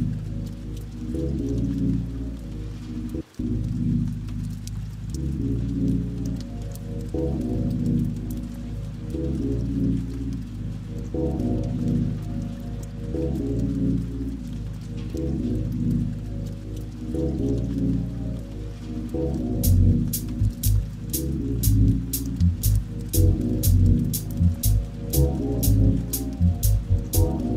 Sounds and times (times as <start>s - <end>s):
Music: 0.0s - 27.5s
Raindrop: 0.0s - 27.5s.